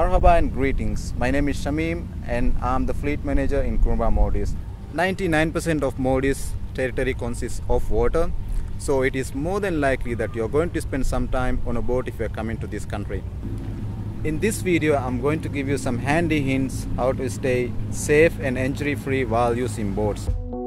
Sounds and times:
Speech: 0:00.0 - 0:13.2, 0:14.3 - 0:20.3.

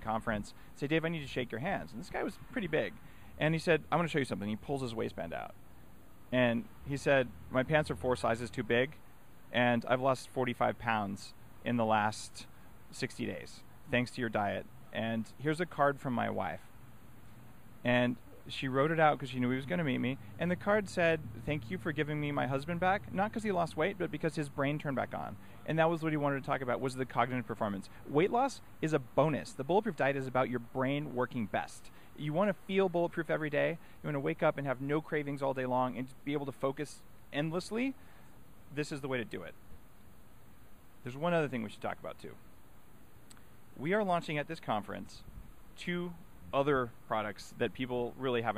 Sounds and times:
Speech: 0:00.0 - 0:05.6, 0:06.3 - 0:16.7, 0:17.8 - 0:38.0, 0:38.7 - 0:39.6, 0:41.0 - 0:42.4, 0:43.8 - 0:48.5.

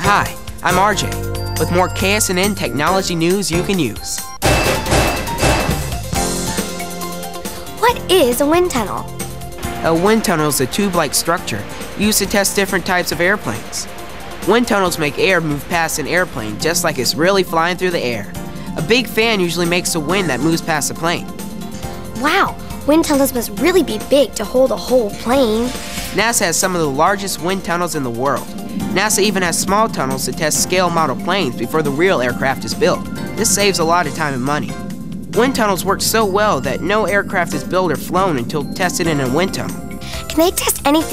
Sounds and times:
Speech: 0:00.0 - 0:04.3, 0:07.8 - 0:09.1, 0:09.8 - 0:13.9, 0:14.5 - 0:21.2, 0:22.2 - 0:34.8, 0:35.4 - 0:41.1
Music: 0:00.0 - 0:41.1.

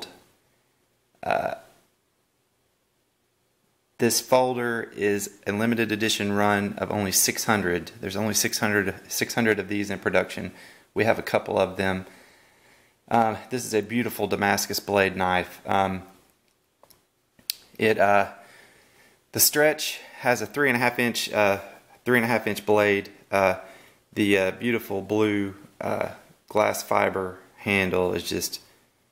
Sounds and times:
Speech: 0:00.0 - 0:00.2, 0:01.2 - 0:01.8, 0:04.0 - 0:12.1, 0:13.1 - 0:16.2, 0:17.8 - 0:18.4, 0:19.3 - 0:28.7.

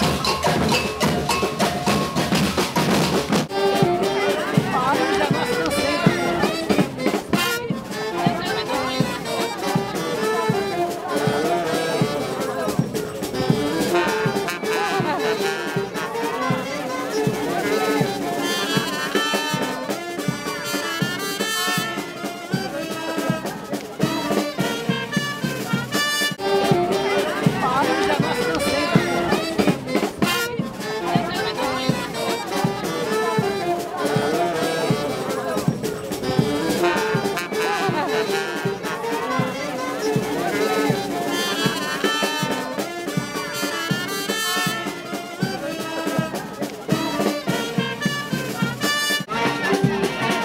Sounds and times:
Music: 0:00.0 - 0:50.4
Speech: 0:03.5 - 0:50.4.

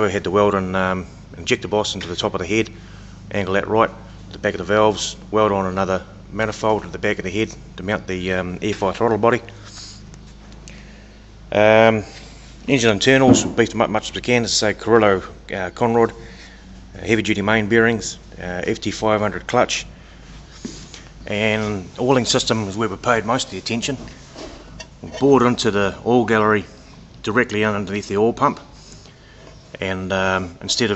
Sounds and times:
Speech: 0:00.0 - 0:09.5, 0:11.5 - 0:16.2, 0:17.0 - 0:19.9, 0:21.3 - 0:24.1, 0:25.0 - 0:28.7, 0:29.8 - 0:30.9.

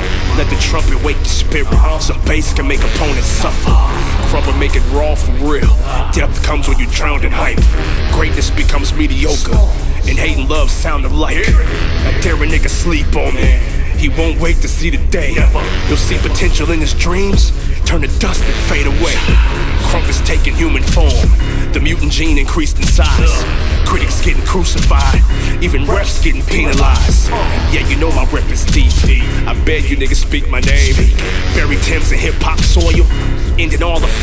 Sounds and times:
Music: 0:00.0 - 0:34.2
Speech: 0:00.3 - 0:34.2.

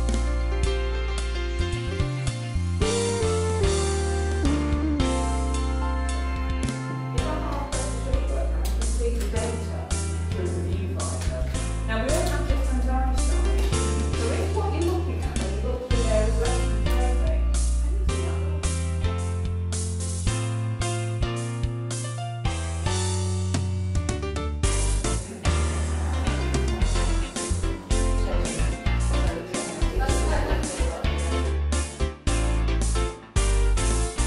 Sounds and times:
Music: 0:00.0 - 0:34.2
Speech: 0:07.2 - 0:18.7, 0:27.8 - 0:31.6.

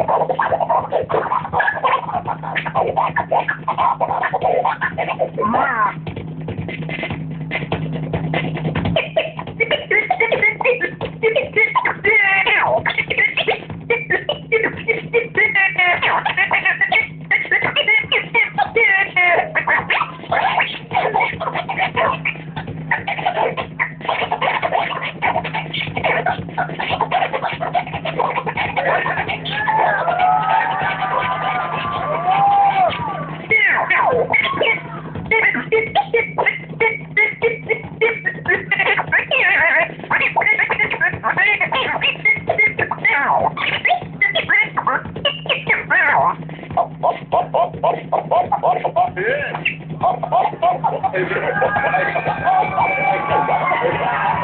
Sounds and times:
Scratching (performance technique): 0:00.0 - 0:54.4.

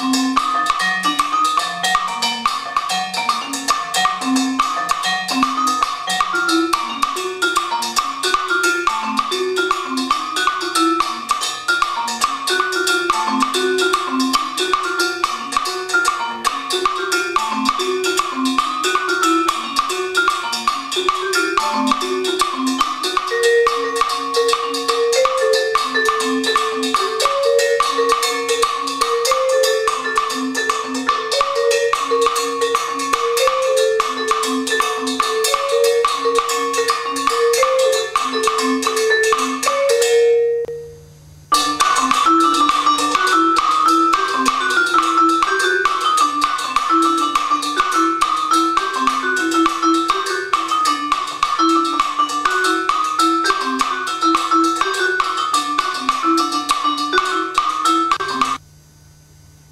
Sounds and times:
Percussion: 0:00.0 - 0:58.6.

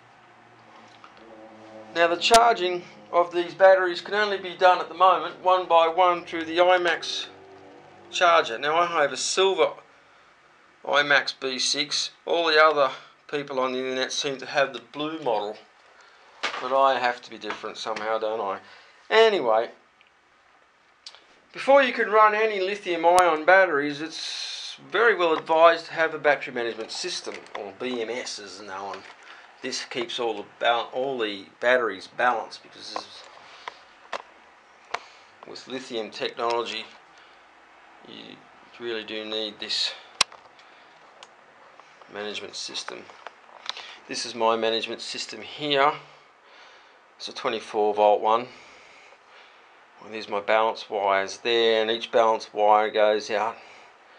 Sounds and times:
Speech: 0:01.9 - 0:07.4, 0:08.1 - 0:09.8, 0:10.9 - 0:15.6, 0:16.6 - 0:19.8, 0:21.6 - 0:33.3, 0:35.4 - 0:37.0, 0:38.0 - 0:40.1, 0:42.1 - 0:43.2, 0:44.1 - 0:46.1, 0:47.2 - 0:48.6, 0:50.0 - 0:53.6.

